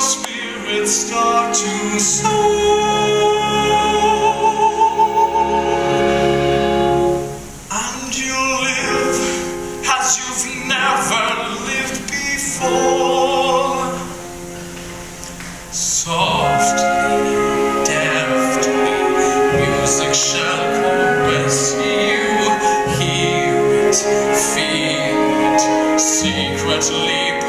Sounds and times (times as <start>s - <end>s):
Opera: 0.0s - 27.4s.